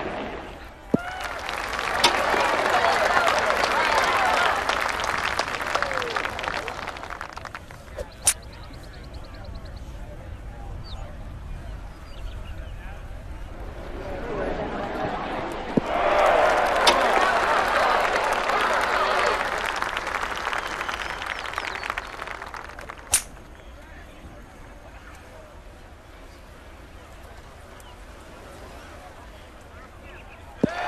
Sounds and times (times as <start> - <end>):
Speech: 7.7 - 15.6, 23.5 - 30.8.